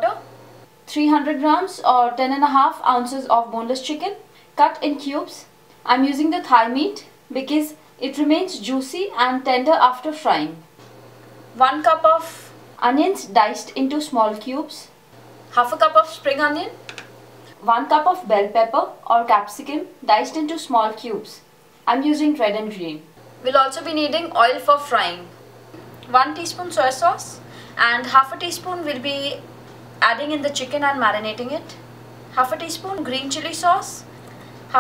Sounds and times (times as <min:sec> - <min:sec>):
Speech: 0:00.0 - 0:00.3, 0:00.9 - 0:10.6, 0:11.6 - 0:16.8, 0:17.6 - 0:25.4, 0:26.1 - 0:29.4, 0:30.0 - 0:31.8, 0:32.4 - 0:34.1.